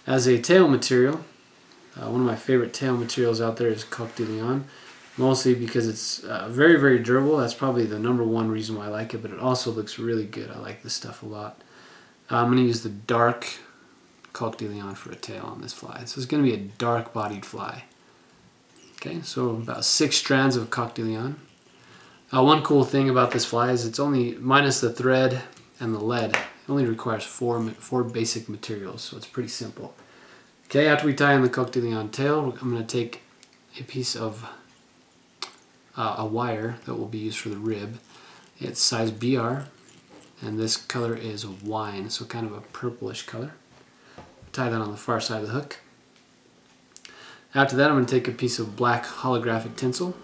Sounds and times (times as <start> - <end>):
Speech: 0.0 - 1.3, 2.0 - 11.6, 12.3 - 17.9, 19.0 - 21.5, 22.3 - 30.0, 30.7 - 34.6, 36.0 - 38.0, 38.6 - 39.7, 40.4 - 43.6, 44.5 - 45.9, 47.5 - 50.2.